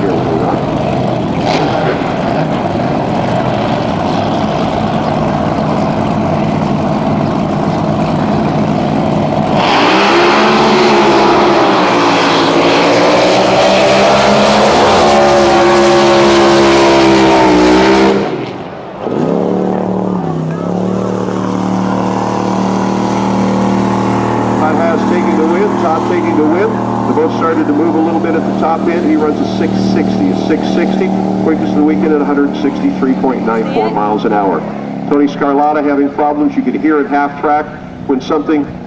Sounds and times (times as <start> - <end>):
Motorboat, speedboat: 0.0 - 38.8
Speech: 24.6 - 38.7.